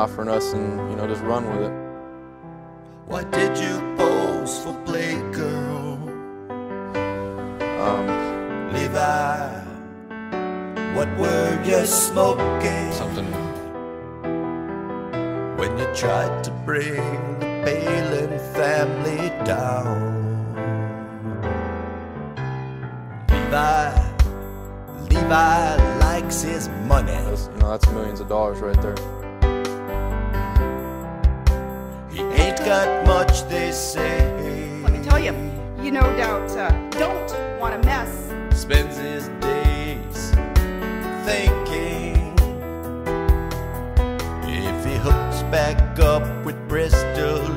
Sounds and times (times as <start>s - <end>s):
Speech: 0.0s - 1.8s, 3.1s - 6.0s, 7.8s - 9.7s, 11.0s - 13.6s, 15.6s - 21.0s, 25.0s - 29.0s, 32.1s - 40.3s, 44.5s - 47.5s
Music: 0.0s - 47.5s.